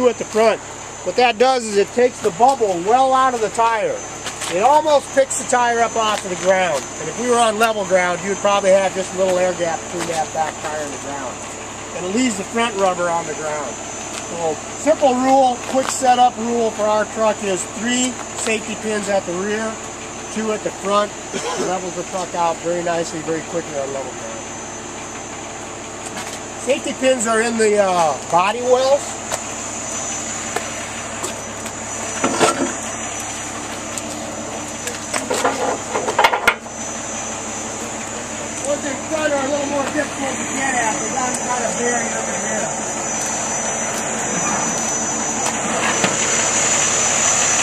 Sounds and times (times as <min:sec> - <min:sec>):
Speech: 0:00.0 - 0:11.4, 0:12.0 - 0:24.5, 0:26.6 - 0:29.1, 0:38.3 - 0:42.8
Truck: 0:00.0 - 0:47.6.